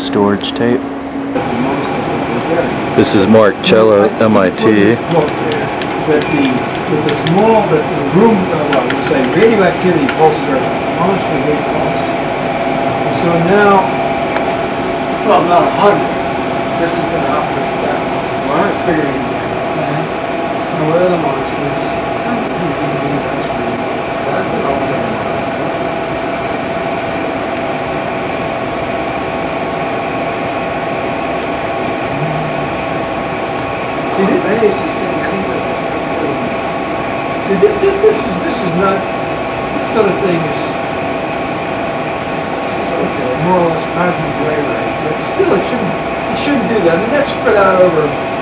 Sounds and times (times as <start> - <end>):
Speech: 0.0 - 0.8, 1.4 - 12.2, 13.0 - 13.9, 15.2 - 25.8, 32.2 - 32.6, 34.1 - 36.6, 37.4 - 39.1, 39.8 - 40.8, 42.6 - 48.2.